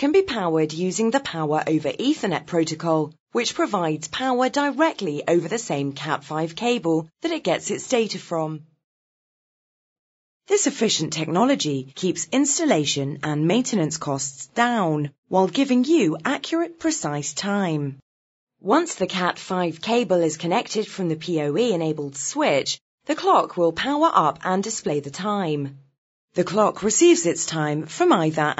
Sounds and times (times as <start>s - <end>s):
Speech: 0.0s - 8.6s, 10.5s - 18.0s, 18.6s - 25.8s, 26.4s - 28.5s.